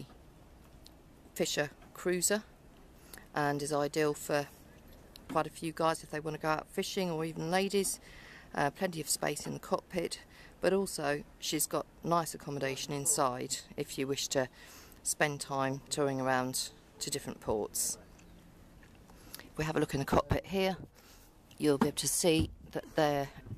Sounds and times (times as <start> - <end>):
Speech: 1.4 - 2.5, 3.4 - 4.6, 5.3 - 8.0, 8.6 - 14.5, 15.1 - 18.0, 19.6 - 20.9, 21.6 - 23.4.